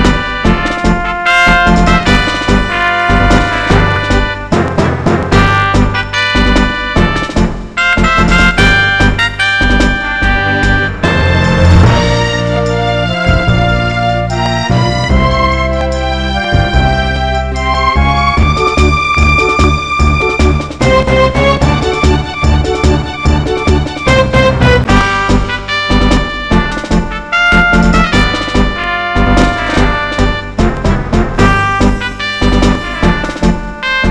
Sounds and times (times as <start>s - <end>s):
Music: 0.0s - 34.1s.